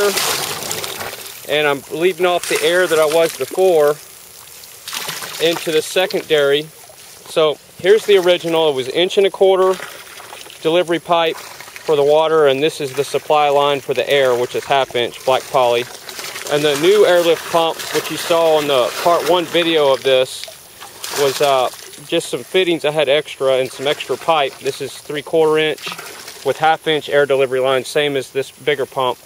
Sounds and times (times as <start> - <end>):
Speech: 0.0 - 0.2, 1.5 - 4.0, 5.4 - 6.7, 7.3 - 9.8, 10.6 - 15.9, 16.5 - 20.5, 21.2 - 29.2.